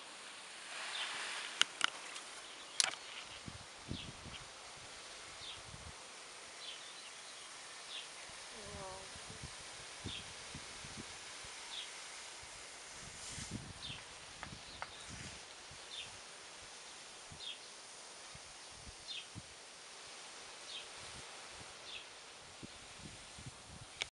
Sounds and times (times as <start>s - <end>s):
Outside, rural or natural: 0.0s - 24.1s.